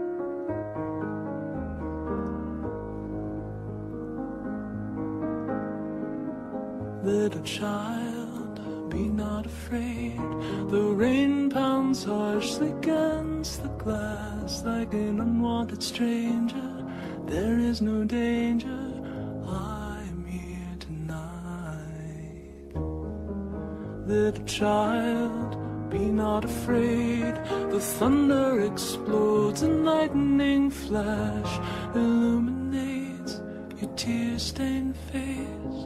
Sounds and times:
Music: 0.0s - 35.8s.

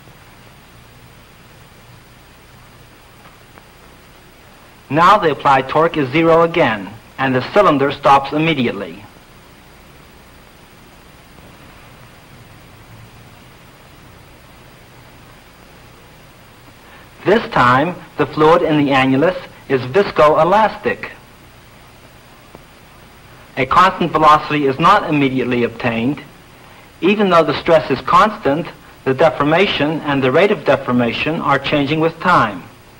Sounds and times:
Speech: 4.9s - 9.1s, 17.2s - 21.2s, 23.6s - 26.3s, 27.0s - 32.8s.

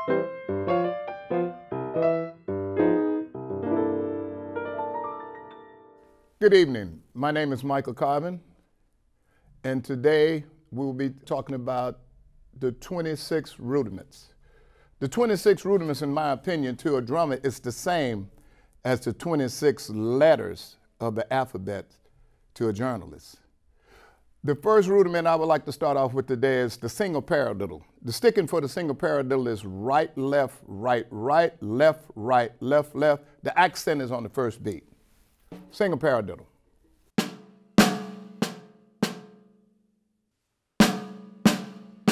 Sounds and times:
Speech: 6.4s - 8.5s, 9.6s - 12.0s, 12.6s - 14.4s, 15.0s - 22.0s, 22.6s - 23.5s, 24.4s - 34.9s, 35.7s - 36.5s.

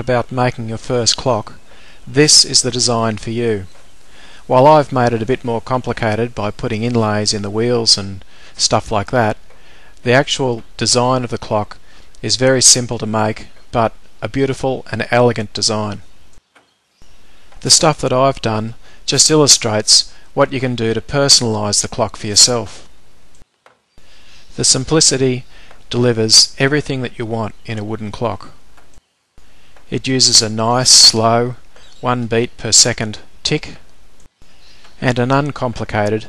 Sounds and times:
Speech: 0.0s - 3.8s, 4.5s - 9.4s, 10.0s - 16.0s, 17.6s - 22.9s, 24.5s - 28.6s, 29.9s - 33.8s, 35.0s - 36.2s.

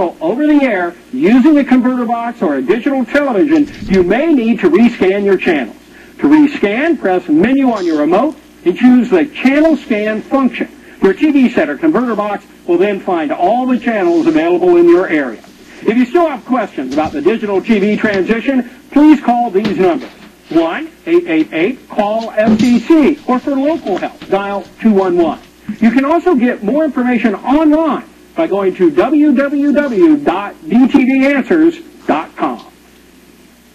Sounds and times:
Speech: 0.0s - 32.8s
Television: 0.0s - 33.7s.

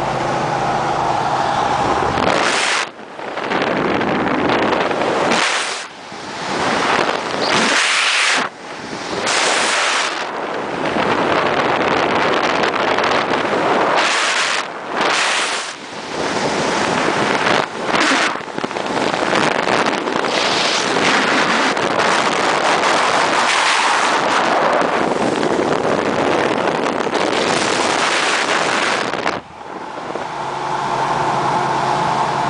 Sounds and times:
Car: 0.0s - 32.4s.

